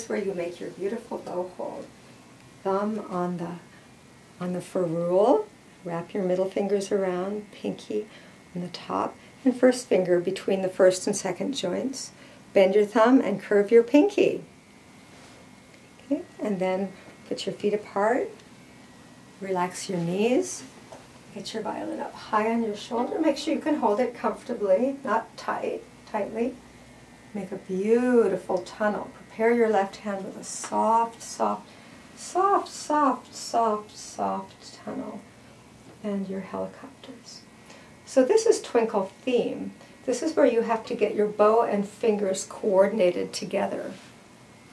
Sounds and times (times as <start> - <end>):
Speech: 0.0 - 1.9, 2.6 - 3.7, 4.4 - 14.5, 16.0 - 18.4, 19.4 - 20.7, 21.3 - 26.6, 27.3 - 35.3, 36.0 - 37.5, 38.1 - 44.1.